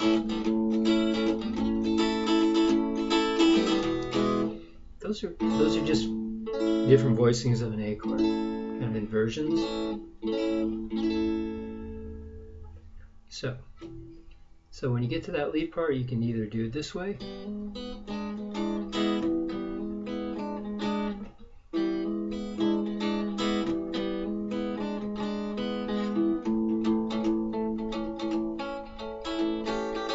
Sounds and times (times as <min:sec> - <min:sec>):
Acoustic guitar: 0:00.0 - 0:14.6, 0:17.2 - 0:30.1
Strum: 0:00.0 - 0:15.2, 0:17.2 - 0:30.1
Speech: 0:05.0 - 0:06.2, 0:06.8 - 0:09.6, 0:13.3 - 0:13.7, 0:14.8 - 0:17.2.